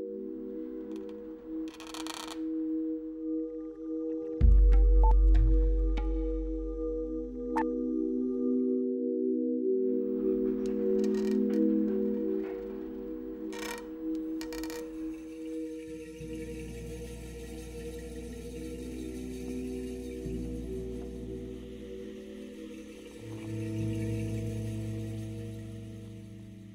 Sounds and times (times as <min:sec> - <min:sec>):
Music: 0:00.0 - 0:26.7.